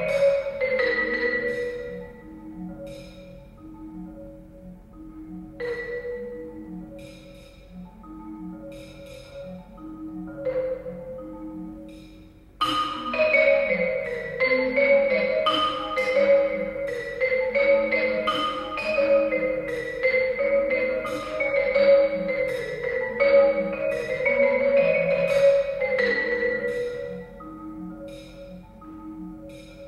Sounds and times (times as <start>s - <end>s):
Marimba, xylophone: 0.0s - 29.8s.